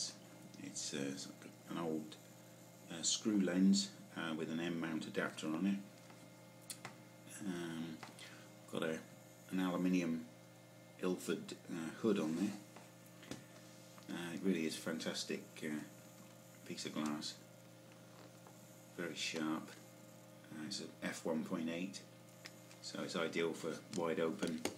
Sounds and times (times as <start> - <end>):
Speech: 0.0 - 2.2, 2.9 - 5.9, 7.3 - 8.0, 8.7 - 10.3, 11.0 - 12.7, 14.1 - 16.0, 16.6 - 17.4, 19.0 - 19.8, 20.5 - 22.1, 22.8 - 24.7.